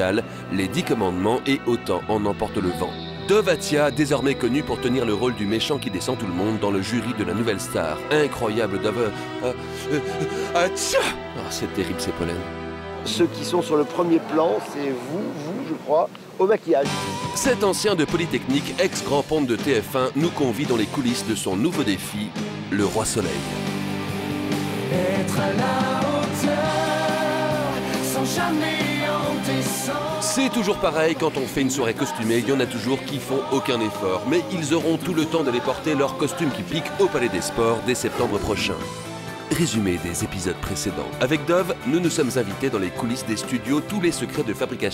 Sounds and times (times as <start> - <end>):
Speech: 0.0 - 9.6, 10.6 - 23.5, 30.2 - 38.9, 39.5 - 44.9
Music: 0.0 - 44.9.